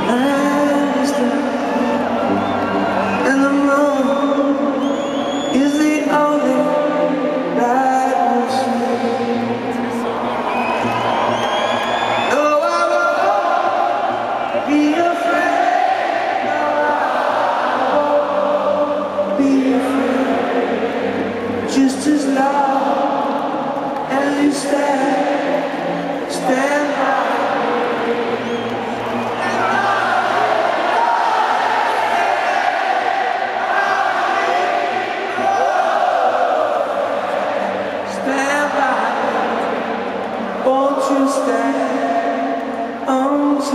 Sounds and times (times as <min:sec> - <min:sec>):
Singing: 0:00.0 - 0:43.7.